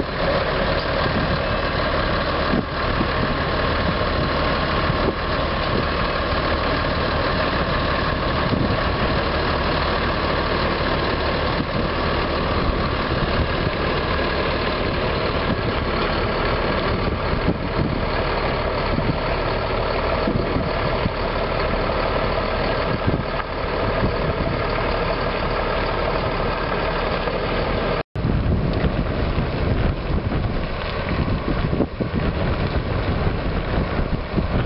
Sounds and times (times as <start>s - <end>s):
Truck: 0.0s - 34.6s.